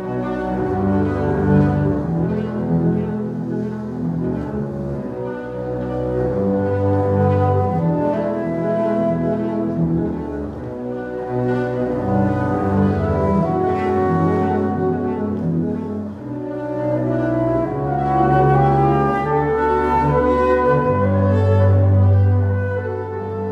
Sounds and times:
Cello: 0:00.0 - 0:23.5
Classical music: 0:00.0 - 0:23.5
Inside, large room or hall: 0:00.0 - 0:23.5.

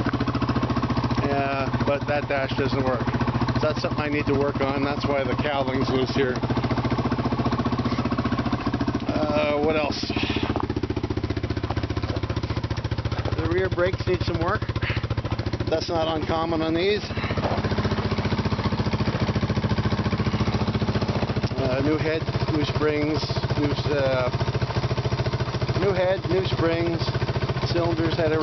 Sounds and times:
Speech: 0:01.2 - 0:03.0, 0:03.6 - 0:06.4, 0:09.1 - 0:10.5, 0:13.4 - 0:14.7, 0:15.7 - 0:17.1, 0:21.5 - 0:24.4, 0:25.8 - 0:28.4.

